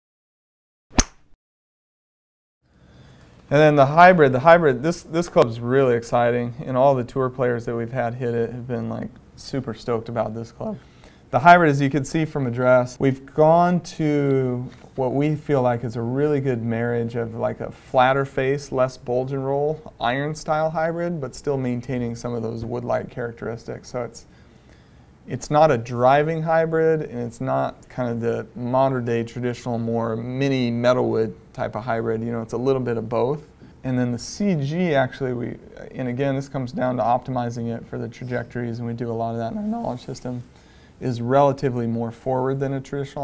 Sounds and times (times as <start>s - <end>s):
Speech: 3.5s - 24.3s, 25.2s - 43.2s.